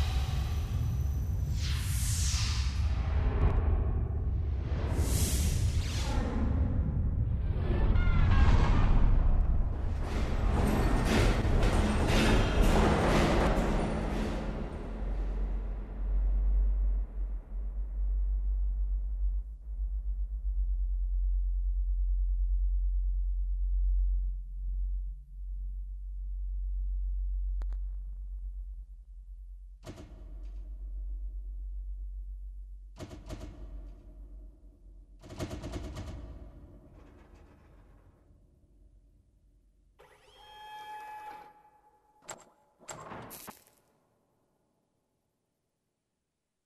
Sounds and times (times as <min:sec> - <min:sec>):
Sound effect: 0:00.0 - 0:22.8, 0:29.8 - 0:32.0, 0:33.0 - 0:38.9, 0:40.0 - 0:44.0.